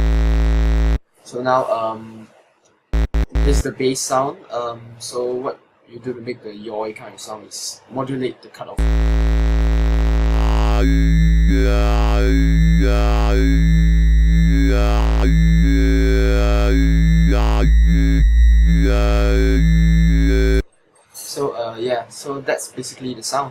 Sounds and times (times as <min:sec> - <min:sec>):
Electronic music: 0:03.0 - 0:03.6, 0:08.8 - 0:20.6.